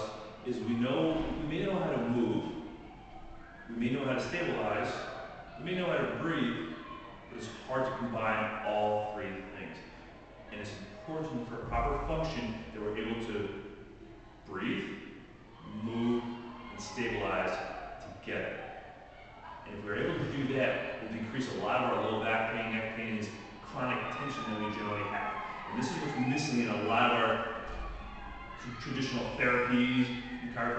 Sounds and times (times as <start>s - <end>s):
Speech: 0.0s - 2.6s, 3.7s - 6.7s, 7.3s - 9.8s, 10.5s - 13.6s, 14.5s - 15.0s, 15.7s - 18.6s, 19.7s - 27.5s, 28.6s - 30.7s.